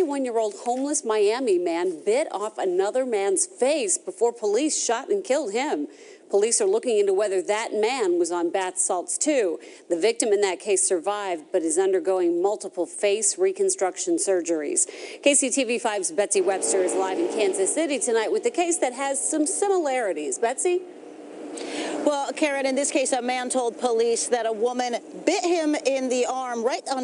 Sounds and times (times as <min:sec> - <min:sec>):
Speech: 0:00.0 - 0:20.8, 0:22.0 - 0:27.0.